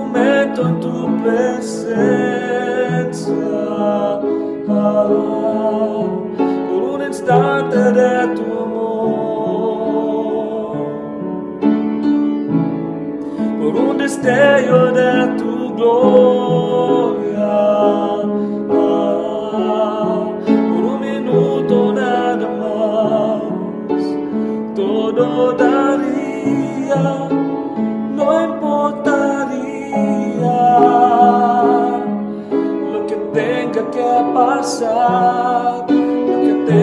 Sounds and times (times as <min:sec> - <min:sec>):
Piano: 0:00.0 - 0:36.8.